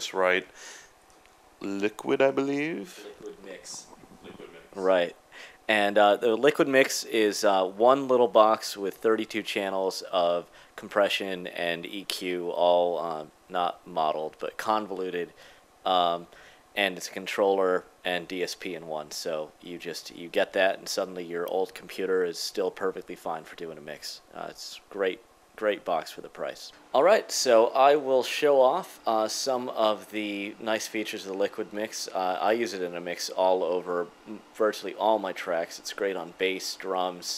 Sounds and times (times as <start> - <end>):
Speech: 0.0 - 0.5, 1.6 - 37.3.